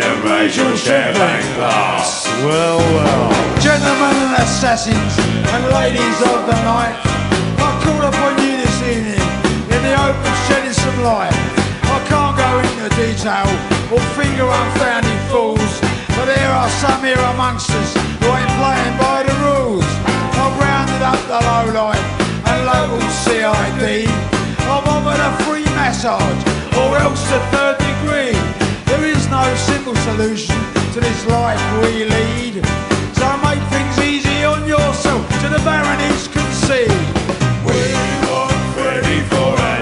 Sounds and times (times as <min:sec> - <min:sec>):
Music: 0:00.0 - 0:39.8.